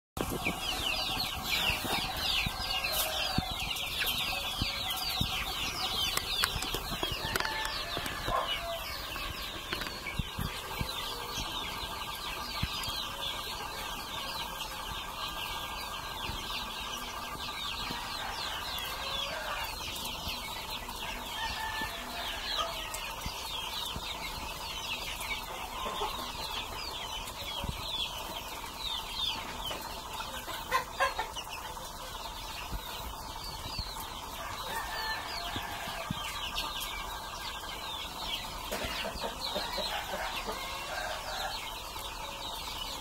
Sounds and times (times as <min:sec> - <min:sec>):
Chicken, rooster: 0:00.2 - 0:43.0.